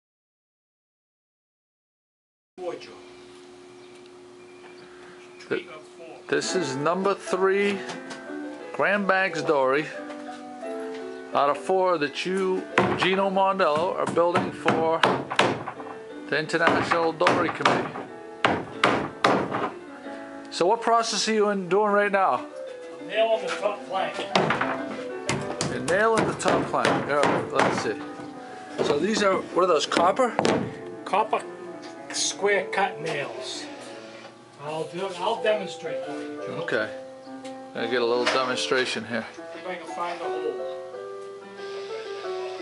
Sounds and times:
Music: 0:05.5 - 0:42.6.

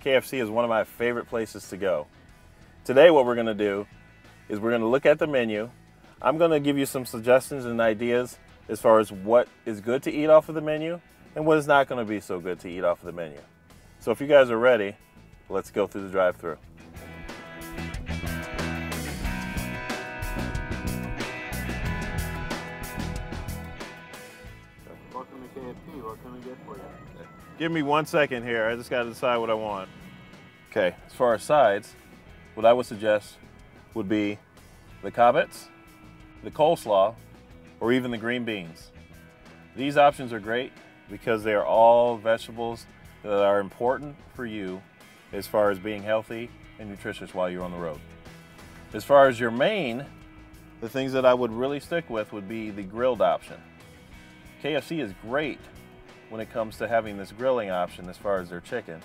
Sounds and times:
Speech: 0:00.0 - 0:02.1, 0:02.8 - 0:03.9, 0:04.5 - 0:13.4, 0:14.0 - 0:16.6, 0:24.8 - 0:29.9, 0:30.7 - 0:32.0, 0:32.6 - 0:33.4, 0:34.0 - 0:34.4, 0:35.0 - 0:35.7, 0:36.4 - 0:37.2, 0:37.8 - 0:38.9, 0:39.8 - 0:48.0, 0:48.9 - 0:50.1, 0:50.8 - 0:53.6, 0:54.6 - 0:55.7, 0:56.3 - 0:59.0
Music: 0:00.0 - 0:59.0.

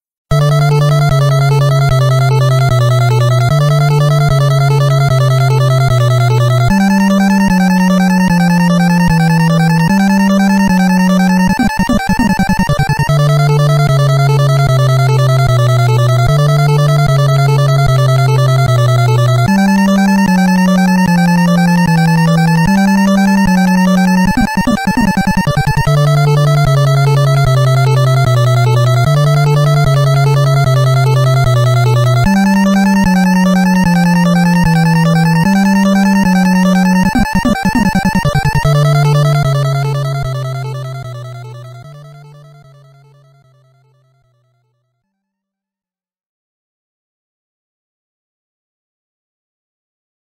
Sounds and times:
Soundtrack music: 0:00.4 - 0:43.8.

